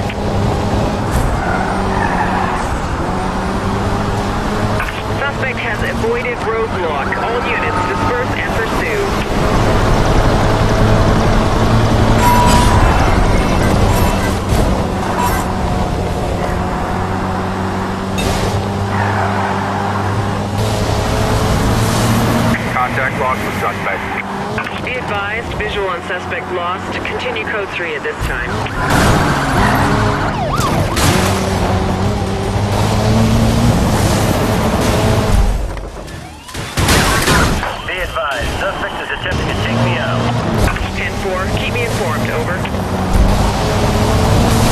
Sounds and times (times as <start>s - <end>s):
Race car, auto racing: 0.0s - 44.7s
Speech: 5.2s - 9.2s, 22.6s - 28.6s, 37.6s - 42.7s.